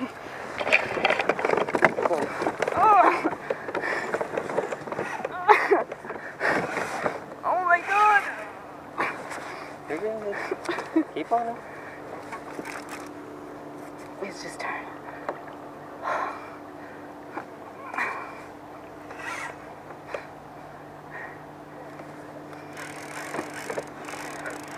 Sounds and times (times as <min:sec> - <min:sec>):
Rowboat, canoe, kayak: 0:00.0 - 0:24.7.